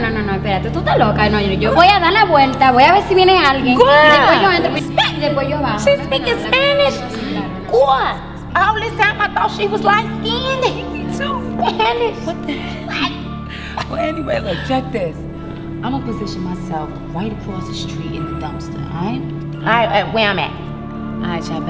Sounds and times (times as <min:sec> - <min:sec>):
Music: 0:00.0 - 0:21.7.